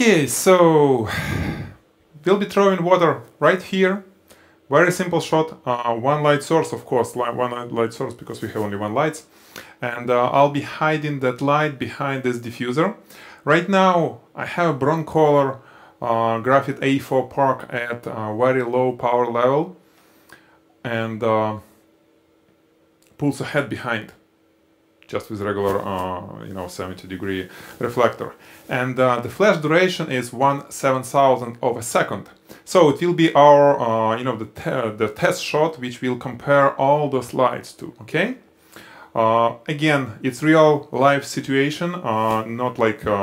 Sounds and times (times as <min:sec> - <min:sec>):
Speech: 0:00.0 - 0:01.3, 0:02.2 - 0:04.1, 0:04.7 - 0:19.8, 0:20.8 - 0:21.7, 0:23.0 - 0:24.2, 0:25.0 - 0:38.5, 0:39.1 - 0:43.2.